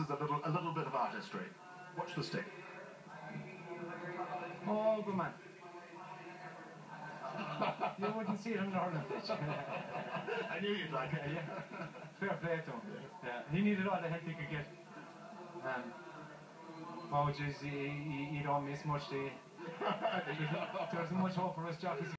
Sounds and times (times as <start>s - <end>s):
Speech: 20.2s - 22.1s.